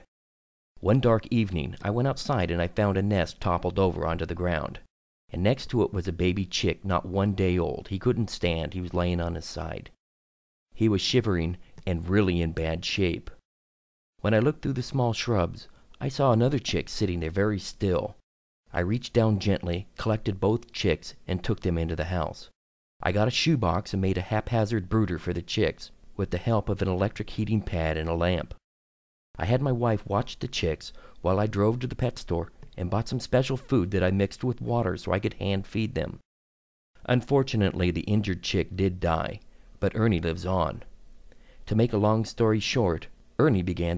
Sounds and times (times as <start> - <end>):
Speech: 0.8 - 10.0, 10.8 - 13.4, 14.2 - 28.6, 29.4 - 36.2, 37.0 - 40.9, 41.6 - 43.9.